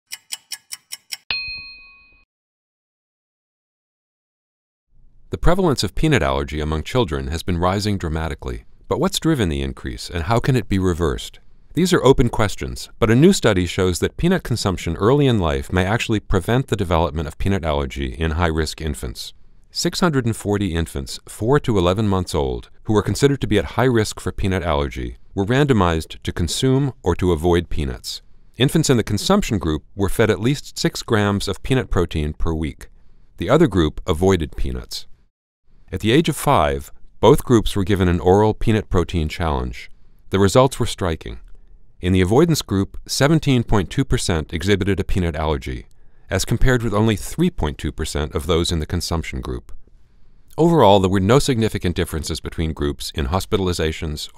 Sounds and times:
Speech: 5.3 - 35.1, 35.9 - 41.4, 42.0 - 49.8, 50.6 - 54.3.

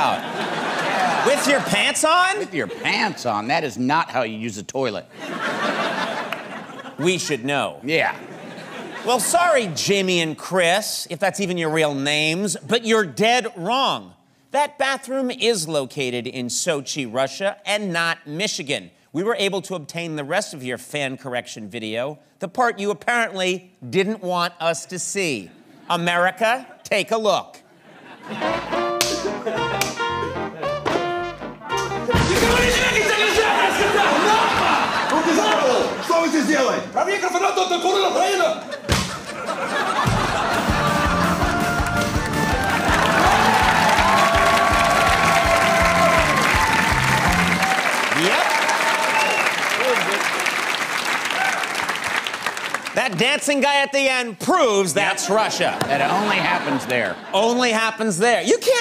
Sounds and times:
Speech: 7.0 - 8.2, 9.1 - 27.6, 35.1 - 38.6, 53.0 - 58.8
Applause: 40.8 - 53.2.

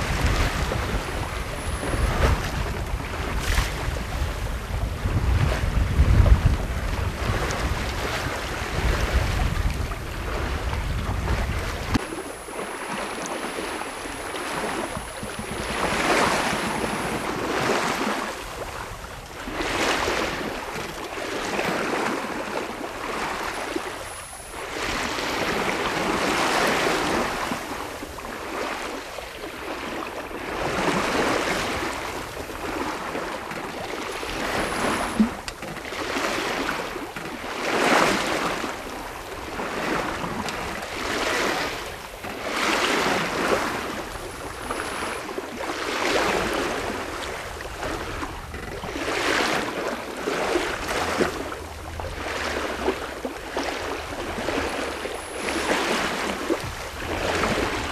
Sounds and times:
Ocean: 0.0 - 57.9
Sailboat, sailing ship: 0.0 - 57.9.

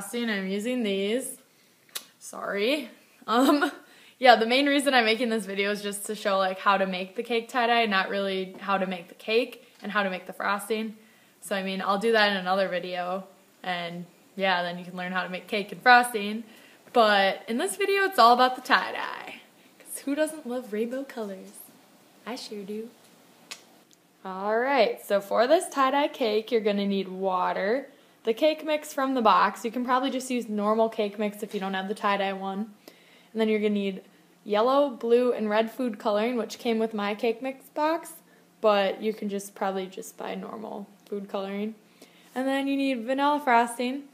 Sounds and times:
Speech: 0.0 - 1.4, 2.2 - 22.9, 24.2 - 32.7, 33.4 - 41.8, 42.4 - 44.1
Inside, small room: 0.0 - 44.1.

